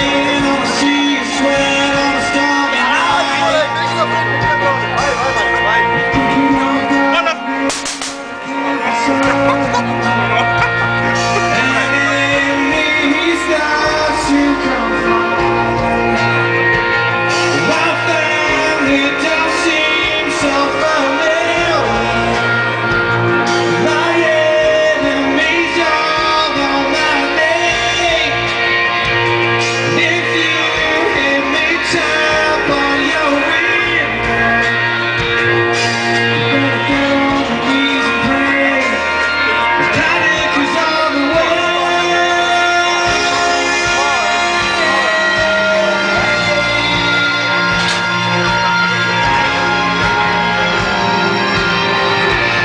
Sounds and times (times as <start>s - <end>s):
Male singing: 0.0s - 4.9s, 6.0s - 7.8s, 8.4s - 16.4s, 17.3s - 28.6s, 29.5s - 49.6s
Music: 0.0s - 52.6s.